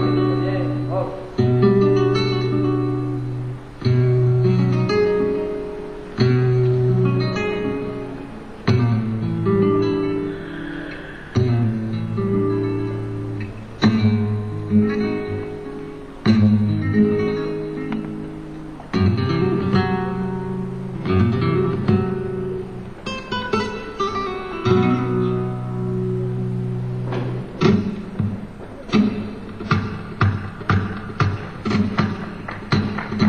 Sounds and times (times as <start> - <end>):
Acoustic guitar: 0.0 - 33.2.